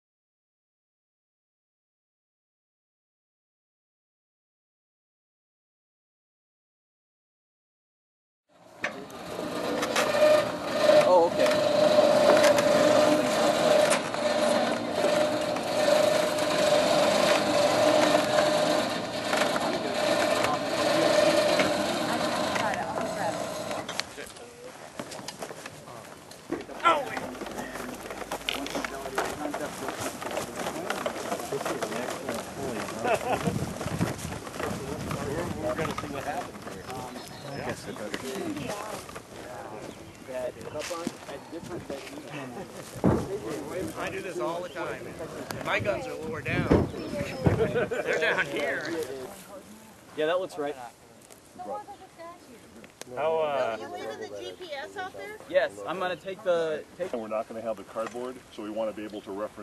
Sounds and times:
Outside, urban or manmade: 8.5s - 59.6s.

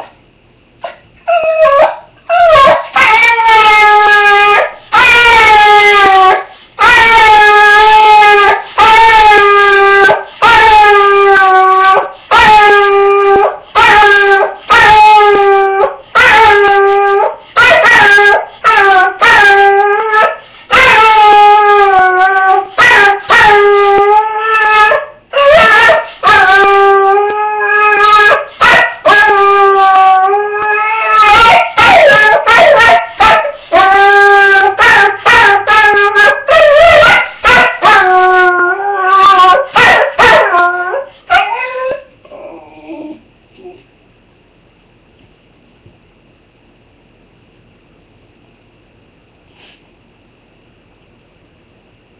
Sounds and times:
Bow-wow: 28.0s - 29.4s, 31.2s - 33.6s, 34.6s - 38.1s, 39.2s - 42.0s.

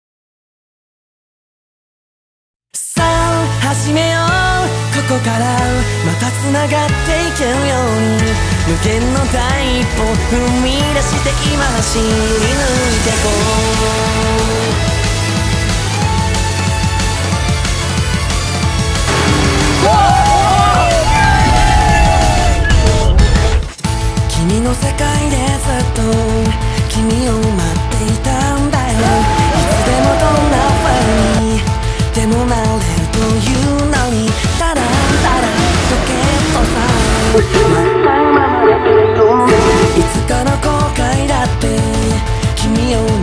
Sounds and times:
Music: 2.8s - 43.2s.

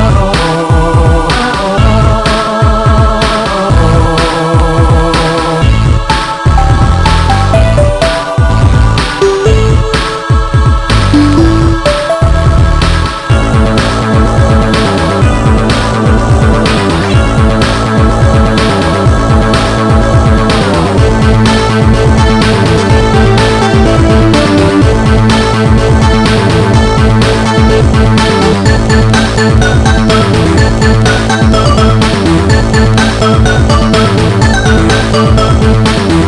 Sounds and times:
Dance music: 0.0s - 36.2s.

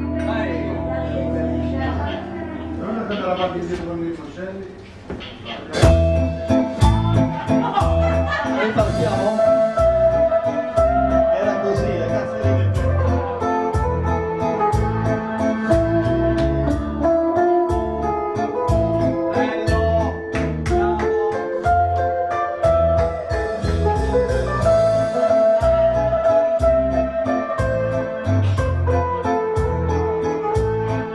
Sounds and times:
Acoustic guitar: 0.0s - 4.0s, 4.8s - 31.1s.

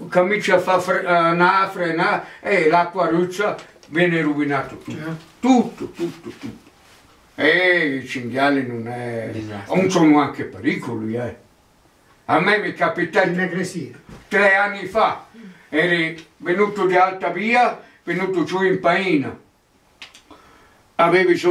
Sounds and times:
Speech: 0.0s - 6.6s, 7.4s - 11.4s, 12.3s - 19.4s, 21.0s - 21.5s.

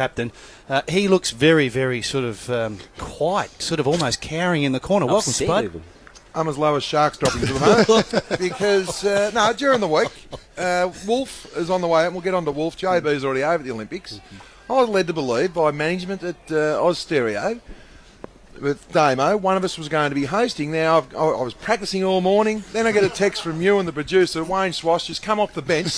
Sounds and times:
Speech: 0.0s - 17.6s, 18.6s - 25.9s.

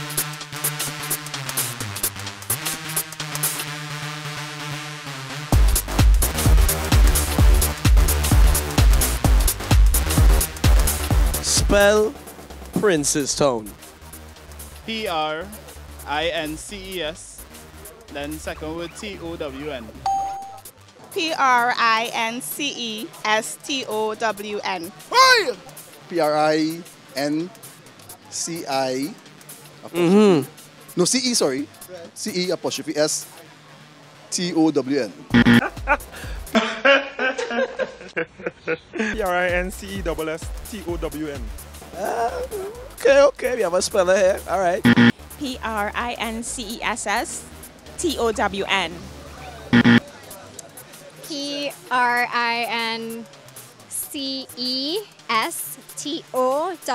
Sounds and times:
Music: 0.0s - 38.0s, 39.0s - 56.9s
Speech: 11.5s - 12.2s, 12.8s - 13.7s, 18.1s - 20.0s, 21.2s - 27.5s, 39.2s - 47.4s, 48.0s - 53.2s, 53.9s - 56.9s.

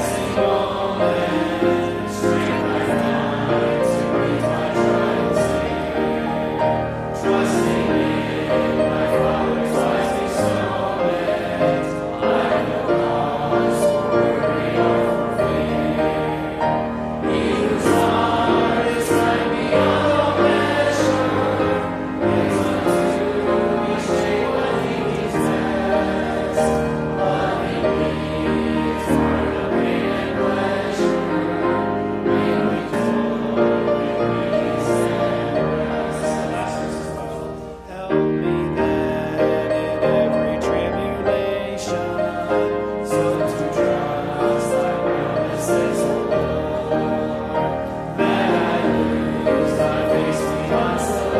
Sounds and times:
Choir: 0.0s - 51.3s.

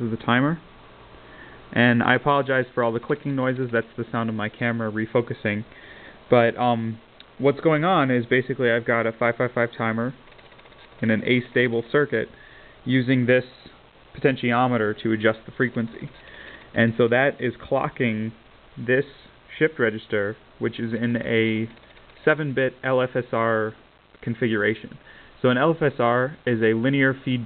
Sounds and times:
Speech: 0.0s - 0.7s, 1.7s - 5.7s, 6.3s - 10.2s, 11.0s - 27.4s.

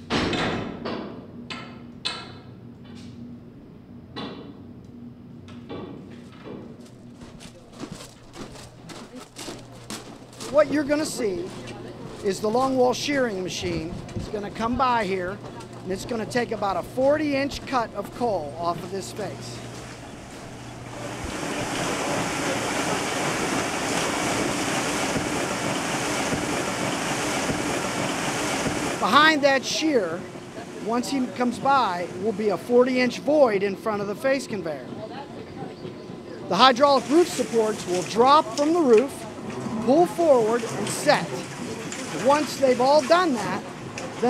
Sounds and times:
Speech: 10.4s - 19.6s, 29.0s - 44.2s.

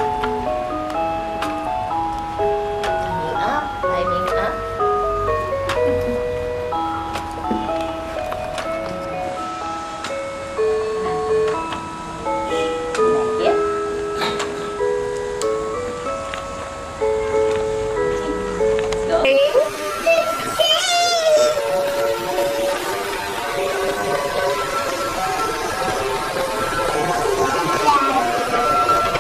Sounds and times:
Music: 0.0s - 29.2s
Child speech, kid speaking: 20.0s - 21.6s, 27.8s - 28.4s.

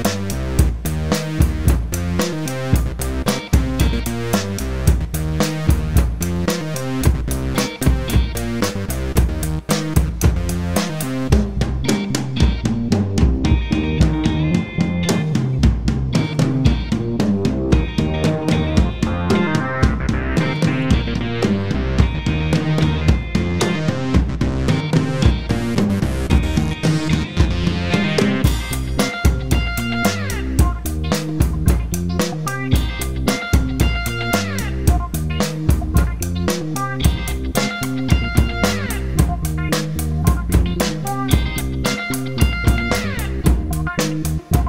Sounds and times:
Bass drum: 0.0s - 44.6s
Drum kit: 0.0s - 44.6s
Exciting music: 1.9s - 32.0s.

